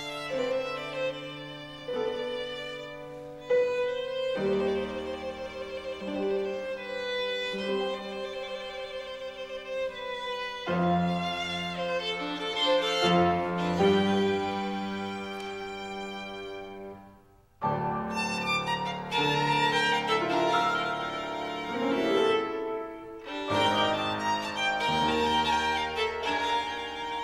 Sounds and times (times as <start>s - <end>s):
Violin, fiddle: 0.0s - 17.2s, 17.9s - 27.2s.